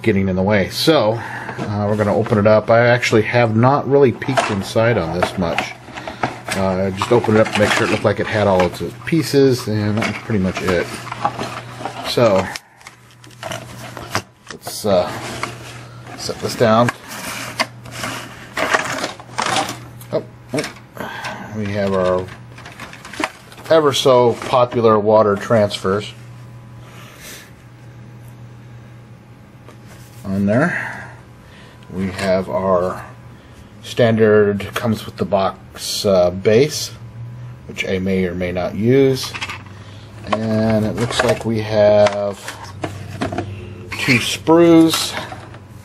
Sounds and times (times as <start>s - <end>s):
Speech: 0.0s - 5.8s, 6.5s - 11.0s, 12.0s - 12.6s, 14.5s - 15.2s, 16.2s - 17.0s, 21.5s - 22.4s, 23.6s - 26.2s, 30.2s - 30.8s, 31.9s - 33.1s, 33.8s - 37.0s, 37.7s - 39.4s, 40.3s - 42.6s, 43.9s - 45.3s.